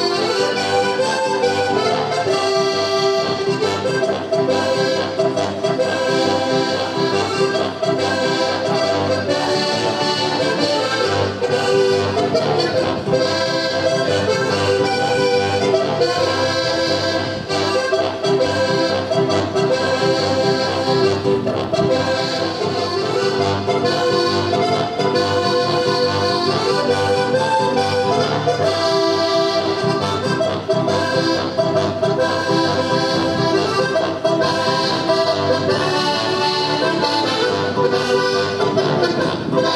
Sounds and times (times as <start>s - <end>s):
Music: 0.0s - 39.7s.